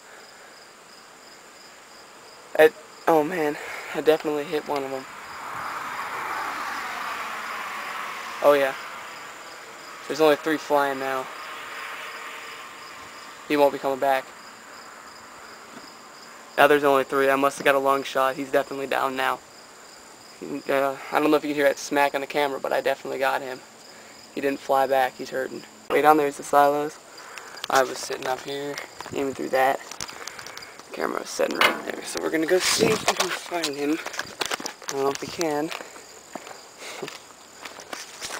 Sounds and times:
Speech: 2.6 - 5.0, 8.4 - 8.8, 10.1 - 11.3, 13.5 - 14.3, 16.6 - 19.4, 20.4 - 23.6, 24.4 - 27.0, 27.7 - 29.8, 30.9 - 34.1, 34.9 - 35.8.

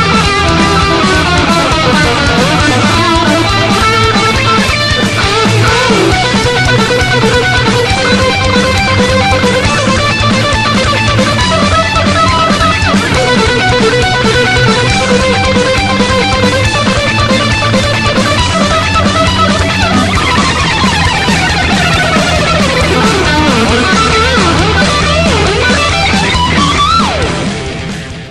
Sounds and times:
Electric guitar: 0.0 - 28.3
Strum: 0.0 - 28.3.

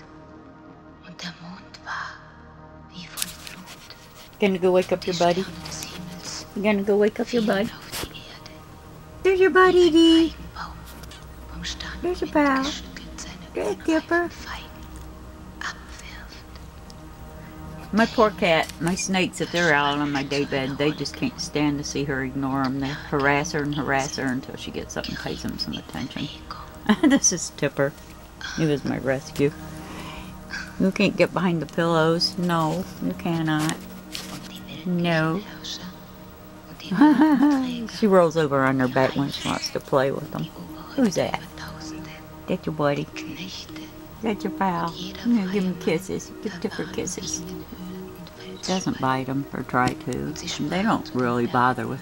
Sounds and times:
Music: 0.0 - 52.0
Speech: 4.4 - 8.4, 9.3 - 10.4, 11.6 - 14.6, 17.9 - 27.9, 28.5 - 29.6, 30.6 - 33.8, 34.5 - 36.0, 36.7 - 41.6, 42.5 - 47.6, 48.6 - 52.0.

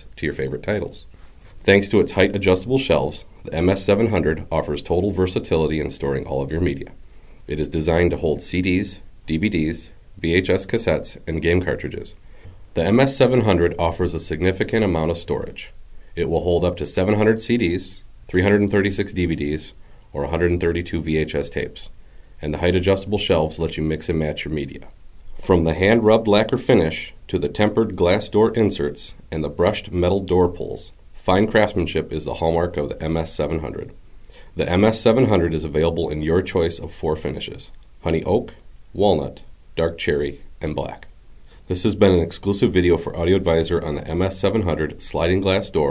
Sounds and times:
Speech: 0.0 - 34.0, 34.6 - 45.9.

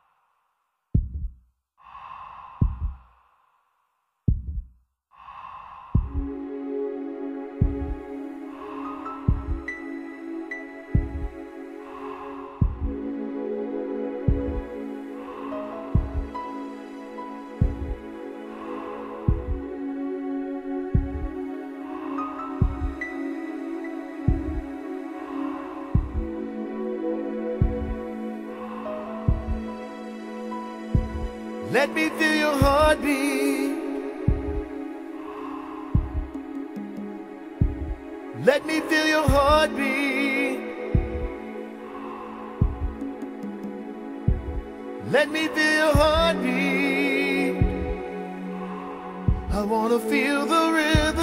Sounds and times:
Heart sounds, heartbeat: 1.0 - 1.4, 2.6 - 3.0, 4.3 - 4.7, 6.0 - 6.3, 9.3 - 9.7, 11.0 - 11.4, 12.6 - 13.0, 14.3 - 14.6, 16.0 - 16.4, 17.6 - 18.0, 19.3 - 19.6, 21.0 - 21.4, 22.6 - 23.0, 24.3 - 24.7, 26.0 - 26.4, 29.3 - 29.6, 31.0 - 31.3, 32.6 - 33.0, 34.3 - 34.7, 36.0 - 36.4, 37.6 - 38.0, 39.3 - 39.6, 41.0 - 41.4, 42.6 - 43.0, 44.3 - 44.7, 46.0 - 46.3, 47.6 - 48.0, 49.3 - 49.6, 51.0 - 51.2.

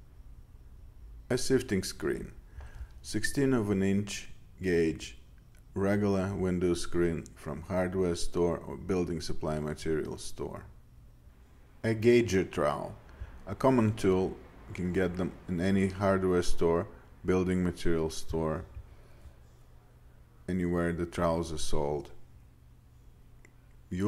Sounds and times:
Speech: 1.3 - 2.4, 3.0 - 10.8, 11.8 - 18.8, 19.8 - 22.3, 23.9 - 24.0.

